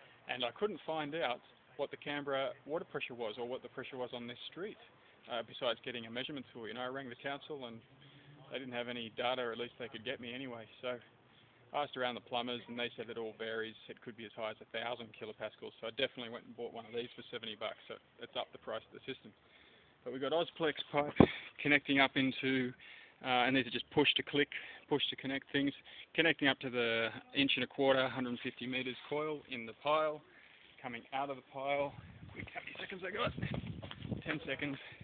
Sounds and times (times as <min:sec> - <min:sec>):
Speech: 0:00.3 - 0:11.1, 0:11.7 - 0:19.4, 0:20.0 - 0:30.2, 0:30.8 - 0:33.5, 0:34.2 - 0:35.0.